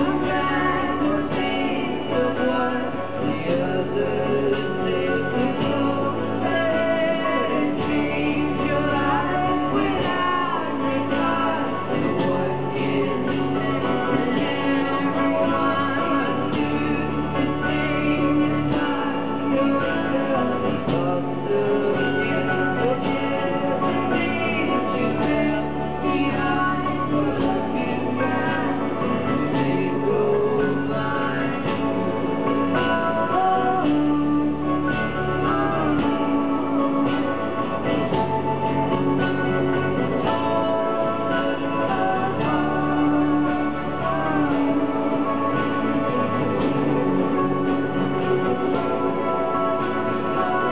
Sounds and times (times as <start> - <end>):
Music: 0.0 - 50.7.